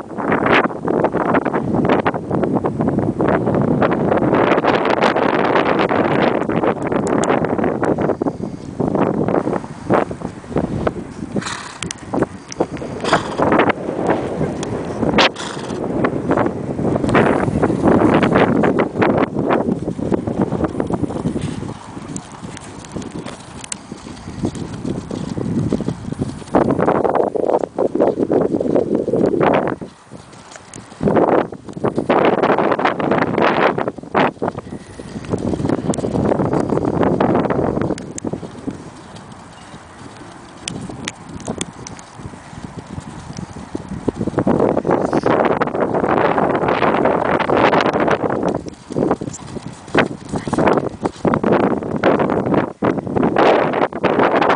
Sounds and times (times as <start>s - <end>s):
Outside, rural or natural: 0.0s - 54.5s
Horse: 3.8s - 54.5s.